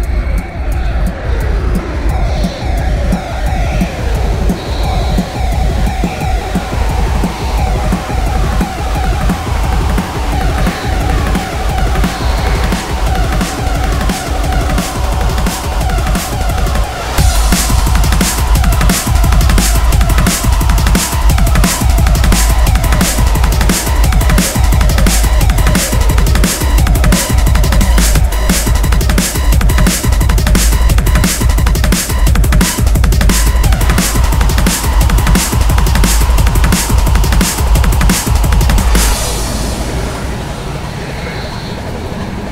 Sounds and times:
Music: 0.0s - 41.1s.

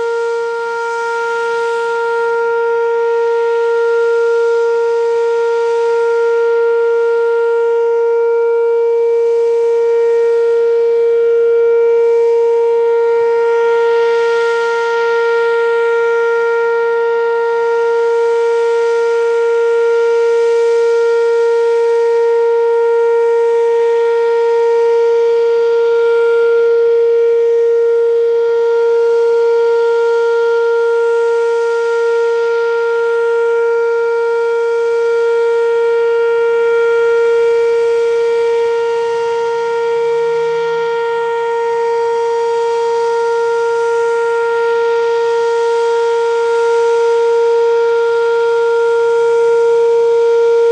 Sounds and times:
Civil defense siren: 0.0s - 50.7s.

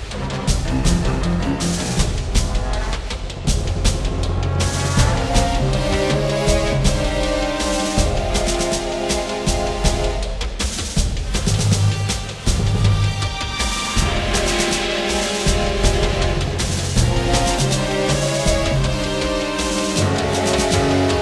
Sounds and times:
Music: 0.0s - 21.2s.

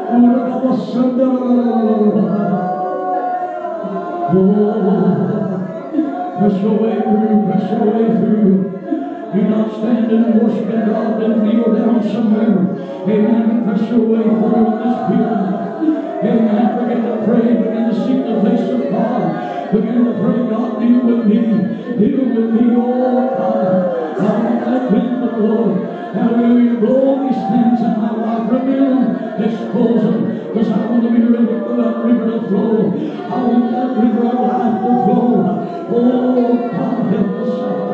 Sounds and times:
Speech: 0.0s - 37.9s.

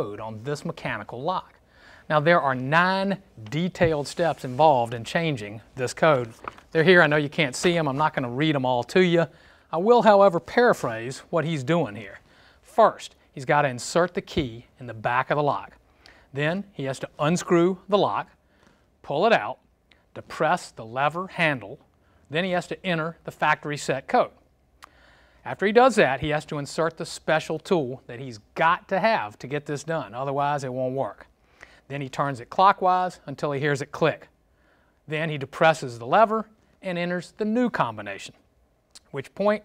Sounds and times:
Speech: 0.0s - 18.4s, 19.0s - 24.4s, 25.4s - 31.3s, 31.9s - 34.3s, 35.1s - 38.4s, 39.0s - 39.6s.

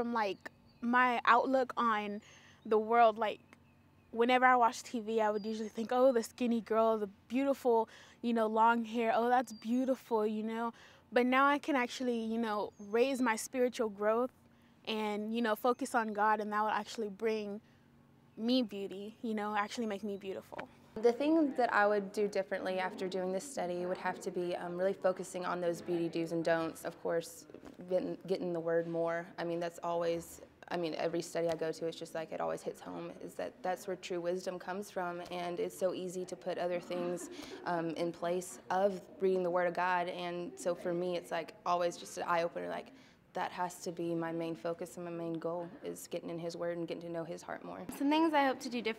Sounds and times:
Speech: 0.0s - 3.5s, 4.2s - 14.3s, 14.9s - 17.6s, 18.4s - 48.9s.

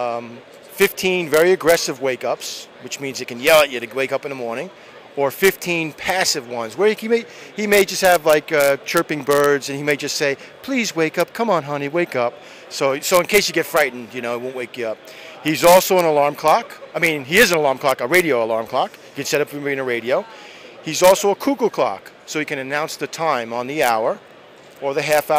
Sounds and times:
Speech: 0.0s - 24.2s, 24.8s - 25.3s.

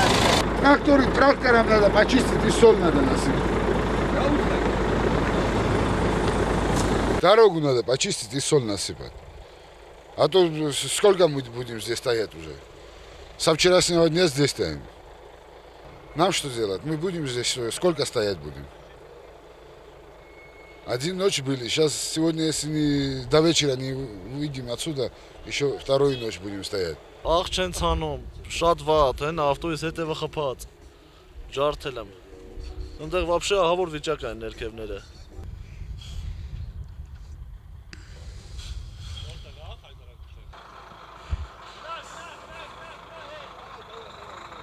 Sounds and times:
Truck: 0.0s - 44.6s
Speech: 0.6s - 3.4s, 7.2s - 9.2s, 10.2s - 12.6s, 13.4s - 14.9s, 16.2s - 18.7s, 20.9s - 30.7s, 33.0s - 35.1s, 39.2s - 40.5s, 41.8s - 44.3s.

